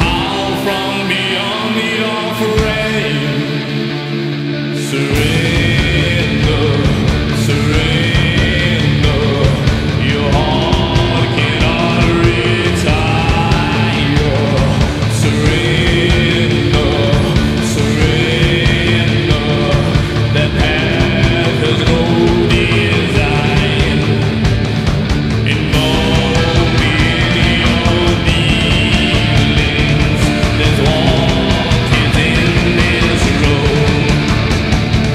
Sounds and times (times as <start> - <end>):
Music: 0.0 - 35.1.